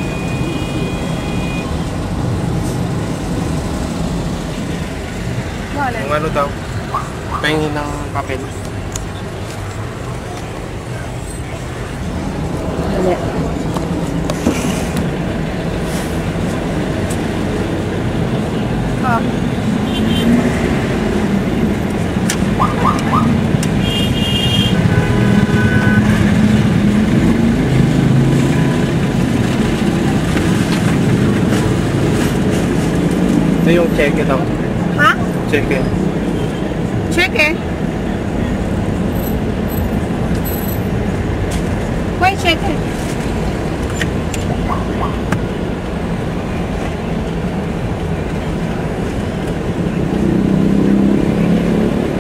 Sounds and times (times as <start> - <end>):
Car: 0.0 - 52.2.